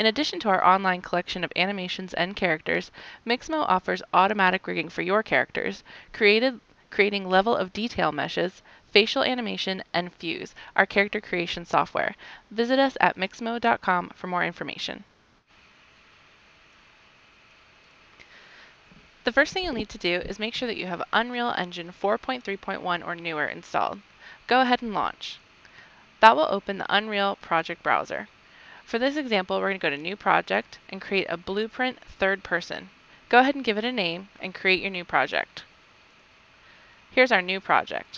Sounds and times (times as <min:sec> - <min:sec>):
Speech: 0:00.0 - 0:15.0, 0:19.3 - 0:25.4, 0:26.2 - 0:28.3, 0:28.9 - 0:35.6, 0:37.2 - 0:38.1.